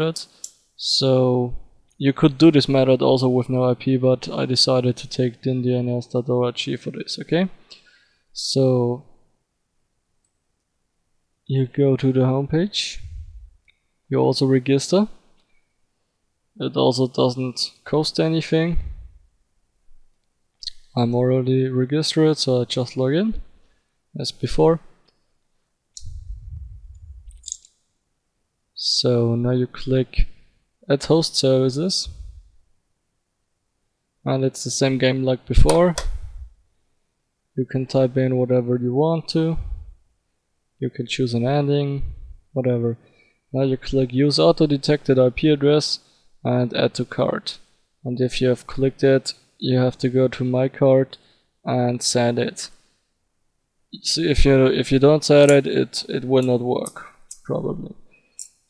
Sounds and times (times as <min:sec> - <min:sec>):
Speech: 0:00.0 - 0:07.6, 0:08.4 - 0:09.1, 0:11.5 - 0:13.3, 0:14.1 - 0:15.2, 0:16.6 - 0:19.0, 0:20.6 - 0:23.5, 0:24.2 - 0:24.9, 0:28.8 - 0:32.3, 0:34.3 - 0:36.4, 0:37.6 - 0:39.8, 0:40.8 - 0:43.0, 0:43.6 - 0:52.8, 0:54.0 - 0:58.0
Inside, small room: 0:00.0 - 0:58.6.